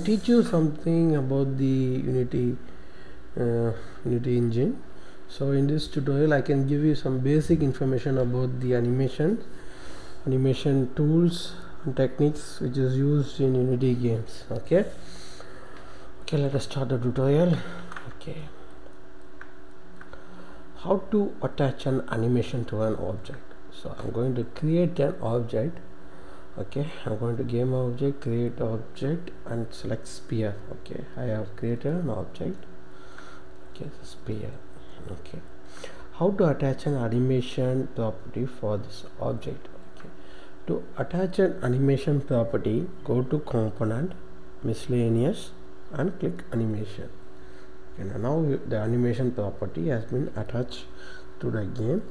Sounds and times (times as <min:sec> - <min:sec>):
Speech: 0:00.0 - 0:02.6, 0:03.4 - 0:09.5, 0:10.2 - 0:15.0, 0:16.3 - 0:18.7, 0:20.8 - 0:25.9, 0:26.6 - 0:32.7, 0:33.8 - 0:35.5, 0:36.1 - 0:47.2, 0:48.0 - 0:52.1.